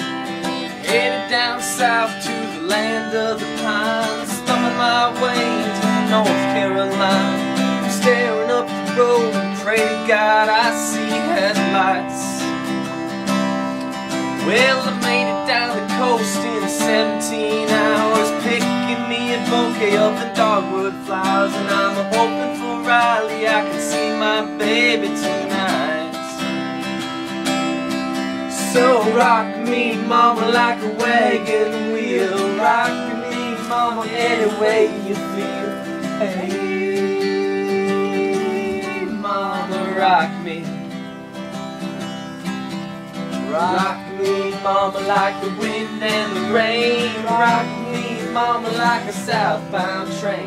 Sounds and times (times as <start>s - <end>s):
Music: 0.0s - 50.4s.